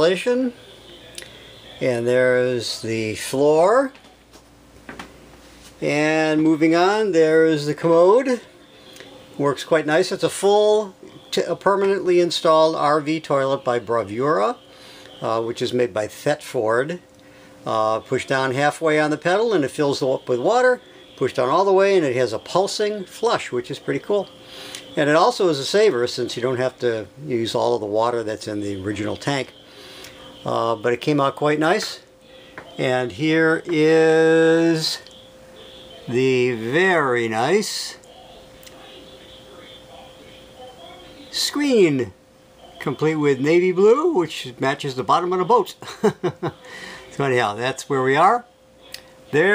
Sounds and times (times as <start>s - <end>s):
Speech: 0.0s - 4.2s, 5.8s - 8.6s, 9.4s - 14.6s, 15.2s - 17.0s, 17.6s - 24.3s, 24.9s - 29.6s, 30.4s - 32.1s, 32.7s - 45.8s, 47.1s - 49.5s
Inside, small room: 0.0s - 49.5s.